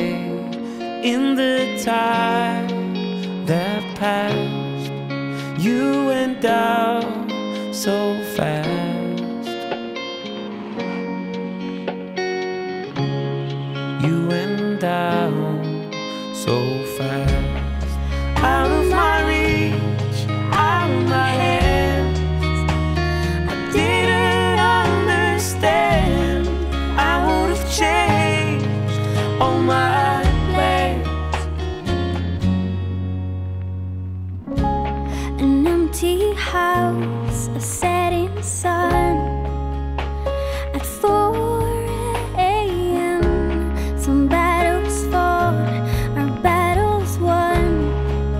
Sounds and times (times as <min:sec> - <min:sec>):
Music: 0:00.0 - 0:48.3.